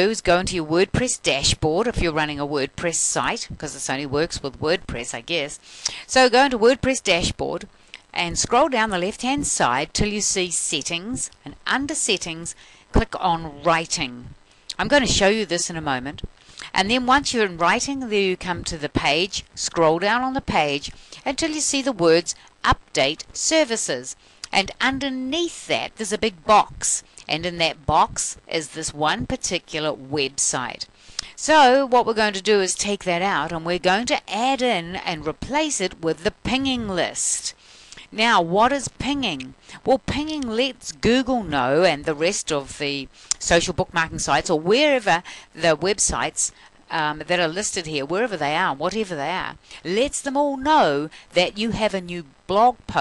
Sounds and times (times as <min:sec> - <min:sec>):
Speech: 0:00.0 - 0:53.0.